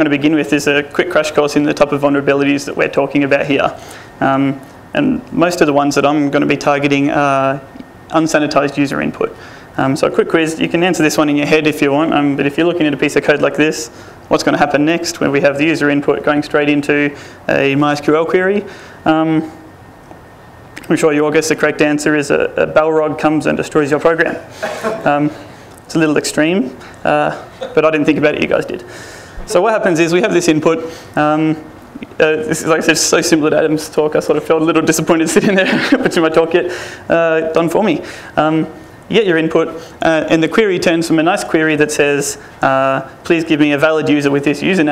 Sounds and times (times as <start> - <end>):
Speech: 0.0 - 19.7, 20.8 - 44.9.